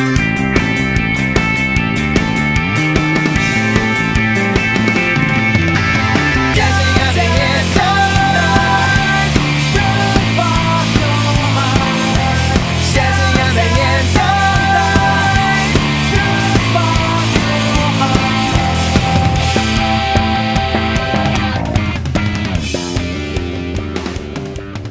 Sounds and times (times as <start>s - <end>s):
Music: 0.0s - 24.9s.